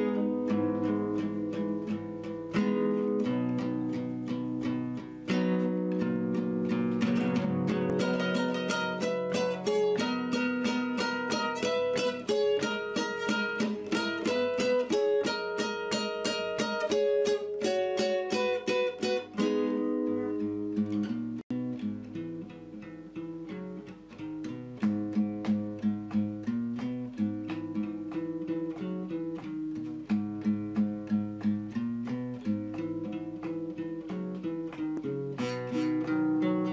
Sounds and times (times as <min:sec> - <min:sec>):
Ukulele: 0:00.0 - 0:36.7.